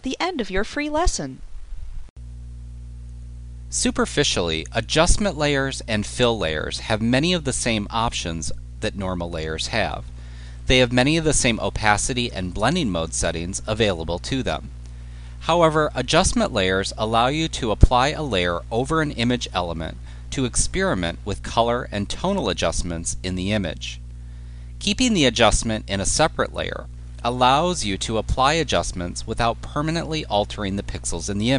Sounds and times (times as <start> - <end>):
Speech: 0.0 - 1.4, 3.7 - 10.1, 10.7 - 14.7, 15.4 - 24.0, 24.8 - 31.5.